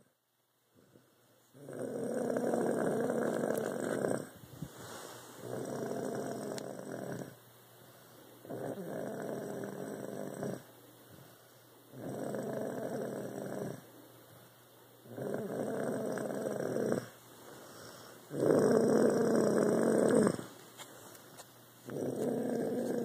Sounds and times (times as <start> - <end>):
Snoring: 0.8 - 7.4, 8.4 - 10.7, 11.9 - 13.8, 15.1 - 17.2, 17.8 - 20.5, 21.9 - 23.0.